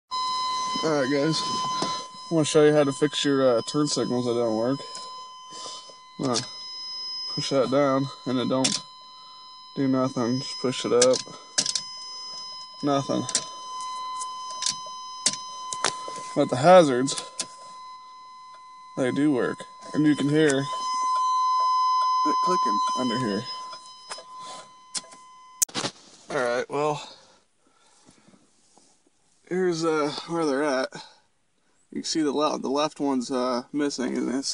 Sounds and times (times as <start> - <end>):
Speech: 0.8 - 1.6, 2.3 - 4.8, 6.2 - 6.5, 7.3 - 8.8, 9.8 - 11.2, 12.8 - 13.3, 16.4 - 17.2, 19.0 - 20.7, 22.3 - 23.5, 26.3 - 27.2, 29.5 - 31.1, 31.9 - 34.5.